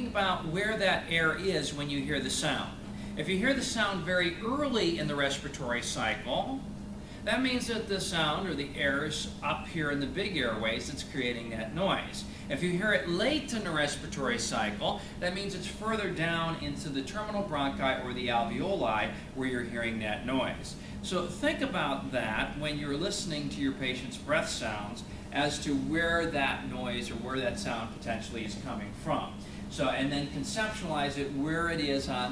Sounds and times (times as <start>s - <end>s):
Speech: 0.0s - 32.3s.